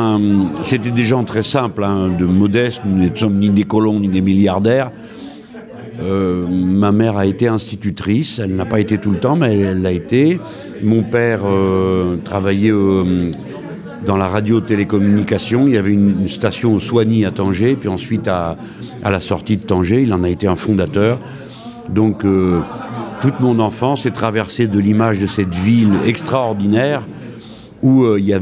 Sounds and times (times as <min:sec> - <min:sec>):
Speech: 0:00.0 - 0:28.4.